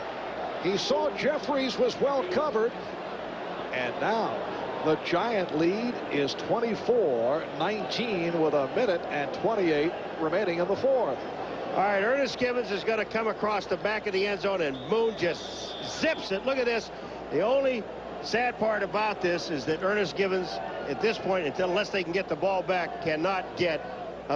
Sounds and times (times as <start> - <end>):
Speech: 0.6 - 2.7, 3.7 - 11.2, 11.8 - 24.3.